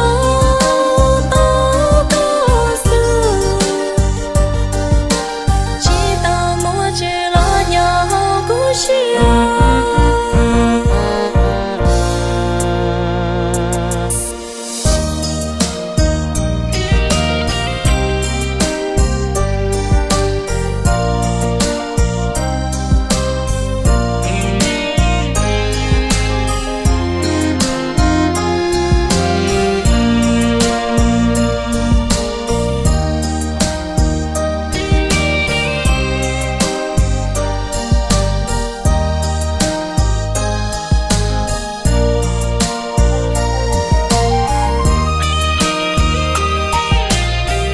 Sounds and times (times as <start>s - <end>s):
Music: 0.0s - 47.7s.